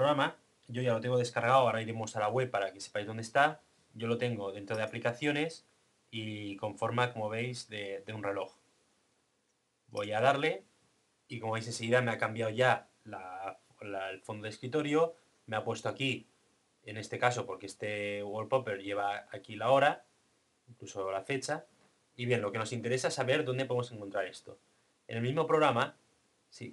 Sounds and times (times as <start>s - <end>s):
Speech: 0.0s - 8.6s, 9.9s - 10.7s, 11.3s - 16.3s, 16.9s - 20.1s, 20.7s - 26.7s.